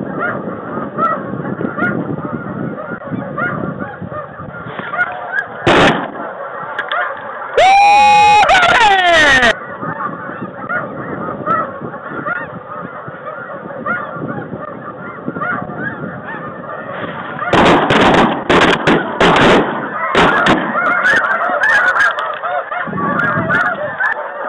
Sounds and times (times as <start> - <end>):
Honk: 0.0 - 24.4.